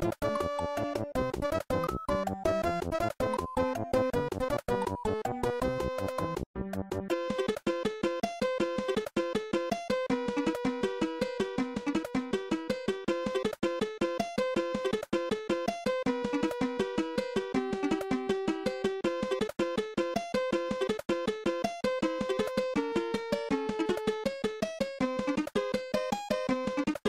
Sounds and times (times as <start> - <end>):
Video game music: 0.0 - 27.0.